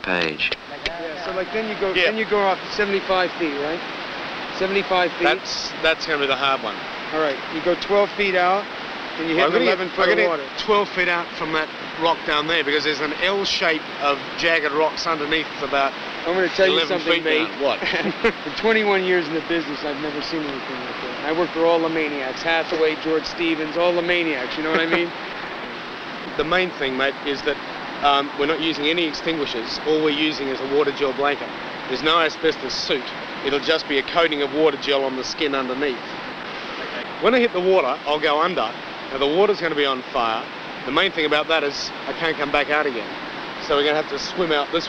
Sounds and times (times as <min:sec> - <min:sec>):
Speech: 0:00.0 - 0:03.8, 0:04.5 - 0:25.1, 0:26.3 - 0:36.1, 0:36.8 - 0:44.8
Laughter: 0:17.8 - 0:18.4, 0:24.6 - 0:25.1.